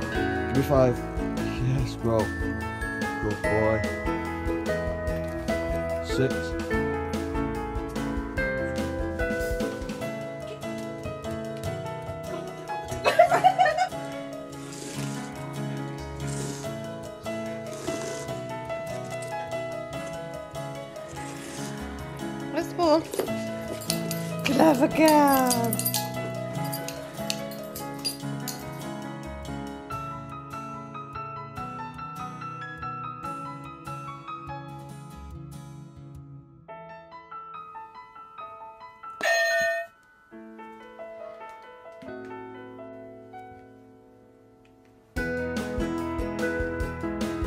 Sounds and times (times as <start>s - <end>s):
Music: 0.0s - 47.4s.